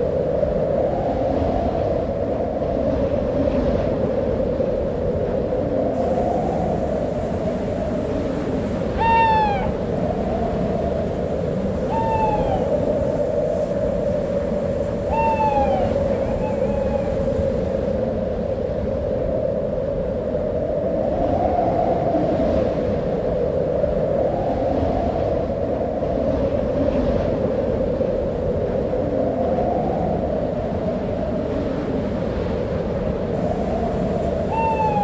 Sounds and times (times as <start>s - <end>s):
Owl: 8.8s - 10.7s, 11.6s - 17.9s, 33.4s - 35.0s.